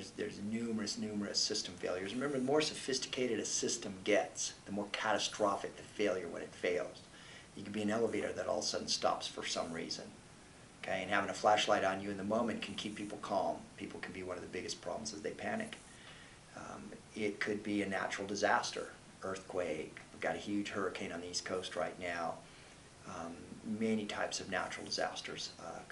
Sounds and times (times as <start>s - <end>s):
Speech: 0.0s - 10.2s, 10.8s - 15.8s, 16.5s - 22.4s, 23.0s - 25.9s.